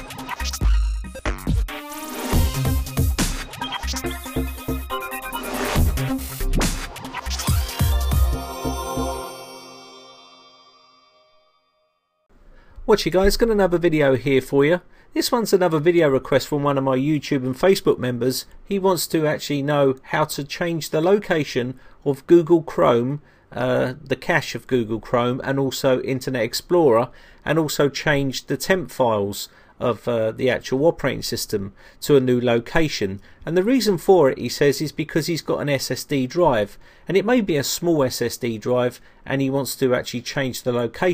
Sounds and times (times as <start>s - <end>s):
Music: 0.0s - 12.3s.